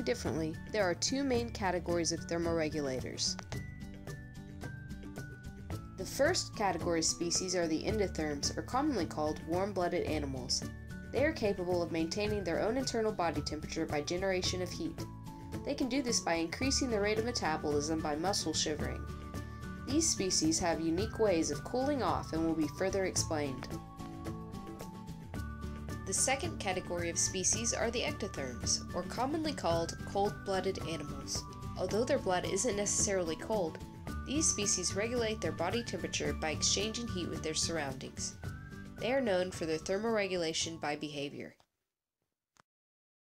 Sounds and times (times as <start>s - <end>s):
Speech: 0.0s - 3.4s, 6.0s - 15.0s, 15.7s - 19.0s, 19.9s - 23.7s, 26.1s - 38.4s, 39.0s - 41.6s
Music: 0.0s - 41.7s.